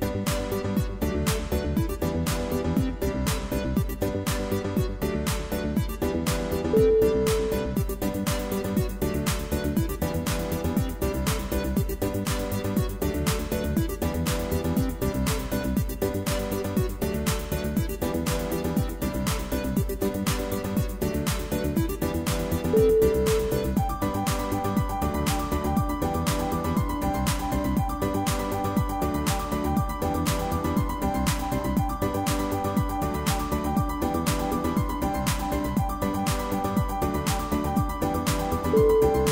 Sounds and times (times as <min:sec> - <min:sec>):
Music: 0:00.0 - 0:39.3.